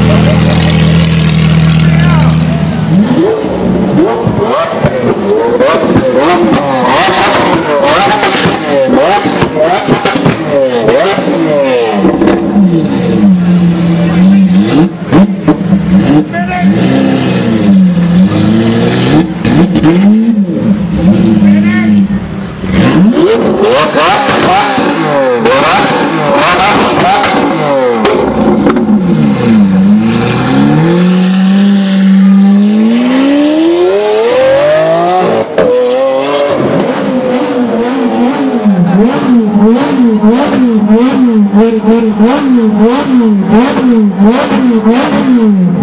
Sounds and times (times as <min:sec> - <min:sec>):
Speech: 0:00.0 - 0:01.1, 0:01.7 - 0:02.8, 0:16.2 - 0:16.8, 0:21.4 - 0:22.1
Outside, urban or manmade: 0:00.0 - 0:45.8
Race car, auto racing: 0:00.0 - 0:45.8.